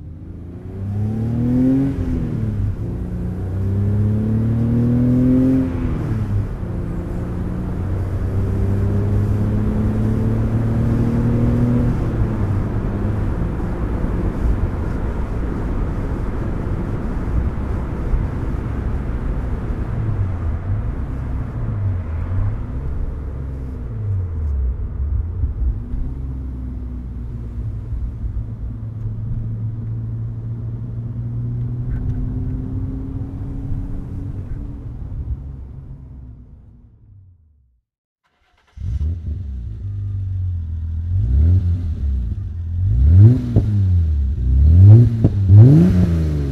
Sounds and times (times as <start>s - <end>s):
Vehicle: 0.0s - 46.5s
Accelerating, revving, vroom: 0.4s - 13.4s, 31.2s - 34.4s, 41.1s - 46.5s.